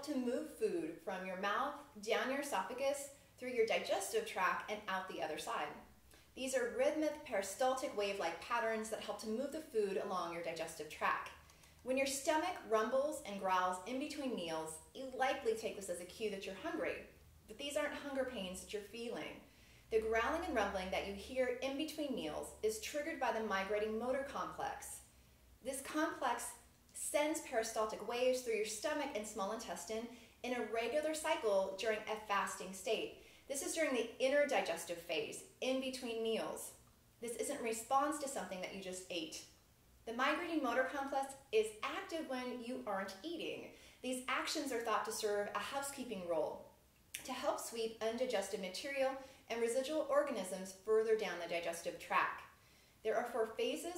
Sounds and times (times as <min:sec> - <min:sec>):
Speech: 0:00.0 - 0:05.8, 0:06.4 - 0:25.0, 0:25.6 - 0:39.5, 0:40.1 - 0:53.9.